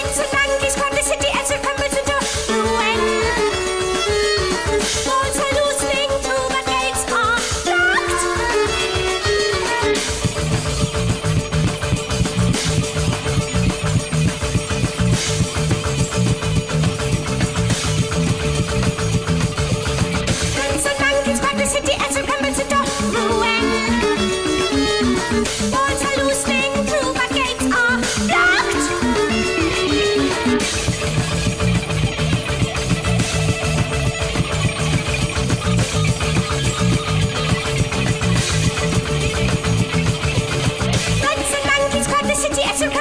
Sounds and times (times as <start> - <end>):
Music: 0.0 - 43.0.